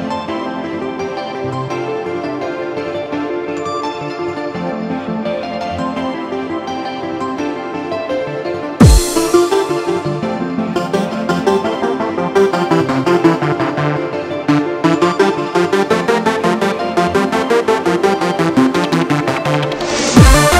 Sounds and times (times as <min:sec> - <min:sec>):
Background music: 0:00.0 - 0:20.5.